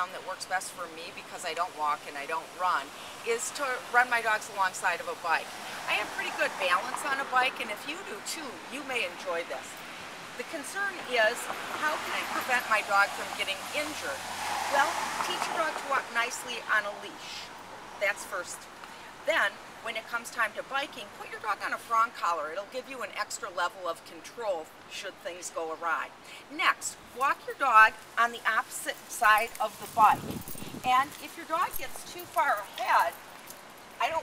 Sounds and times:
Speech: 0.0 - 9.7, 10.4 - 18.7, 19.3 - 30.2, 30.8 - 33.2.

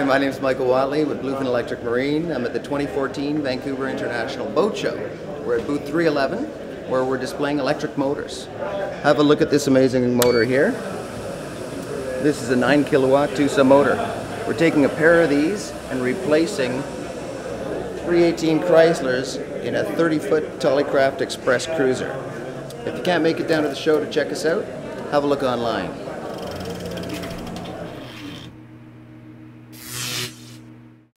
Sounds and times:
Speech: 0.0 - 26.3.

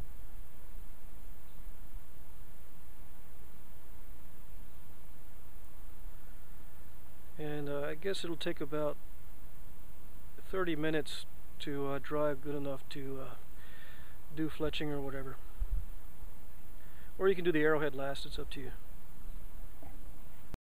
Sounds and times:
Speech: 7.4 - 9.0, 10.4 - 13.4, 14.3 - 15.4, 17.2 - 18.8.

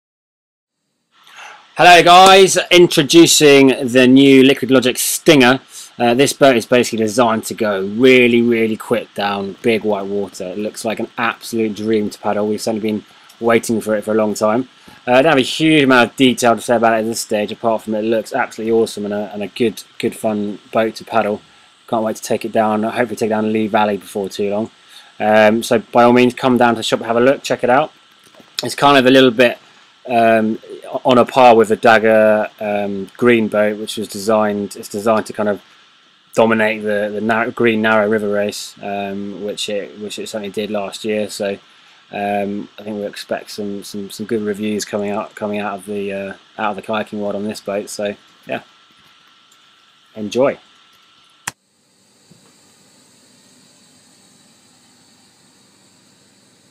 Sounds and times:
Speech: 1.8 - 35.6, 36.4 - 48.7, 50.1 - 50.6.

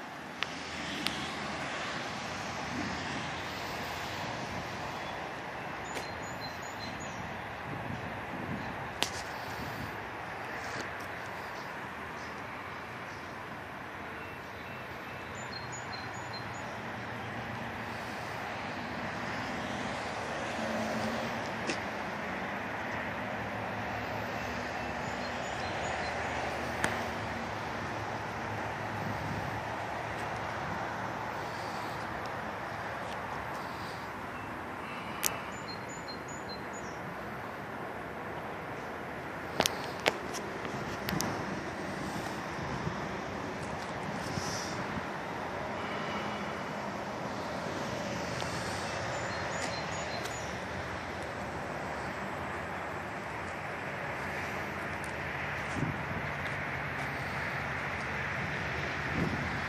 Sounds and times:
Vehicle: 0.0 - 59.6.

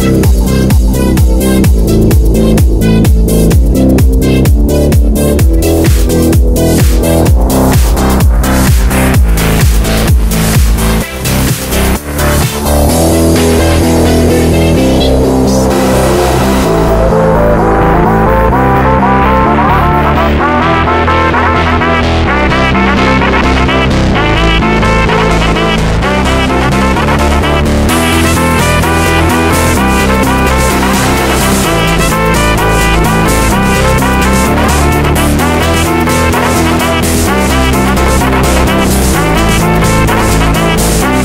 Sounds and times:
Electronic dance music: 0.0 - 41.2
House music: 0.0 - 41.2.

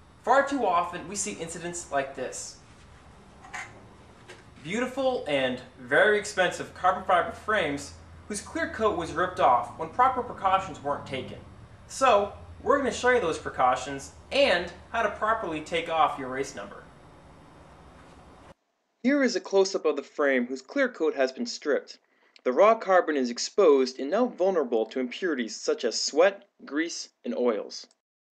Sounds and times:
Speech: 0.3 - 2.6, 4.6 - 16.9, 19.1 - 28.0.

